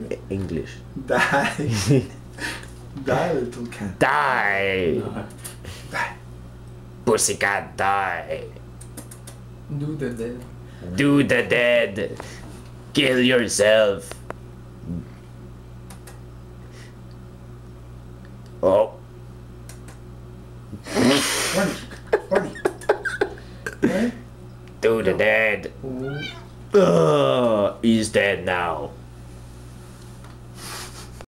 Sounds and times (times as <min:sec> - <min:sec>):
Speech: 0:00.0 - 0:01.2, 0:03.0 - 0:05.3, 0:07.1 - 0:08.6, 0:09.7 - 0:12.2, 0:13.0 - 0:14.1, 0:18.6 - 0:19.0, 0:24.8 - 0:26.2, 0:26.8 - 0:29.0
Meow: 0:25.9 - 0:26.5.